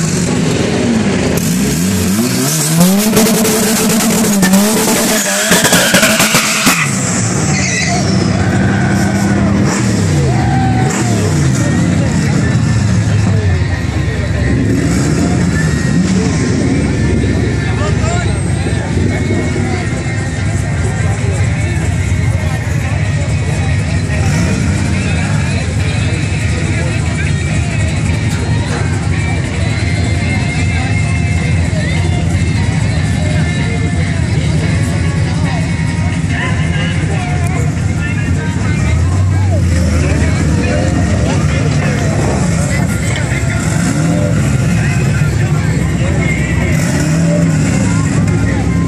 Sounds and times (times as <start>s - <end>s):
Speech: 10.3s - 48.8s
Music: 24.7s - 48.8s.